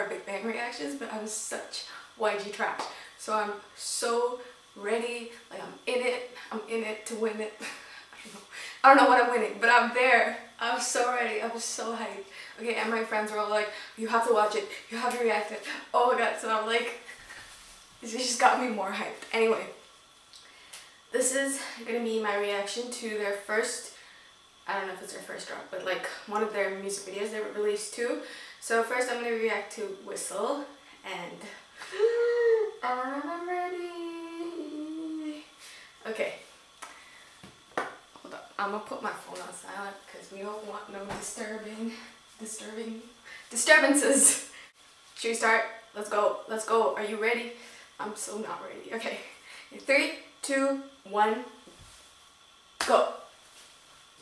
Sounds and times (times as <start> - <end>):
Speech: 0.0 - 17.1, 18.0 - 19.8, 21.2 - 24.0, 24.7 - 36.5, 38.2 - 44.5, 45.2 - 51.6, 52.8 - 53.3.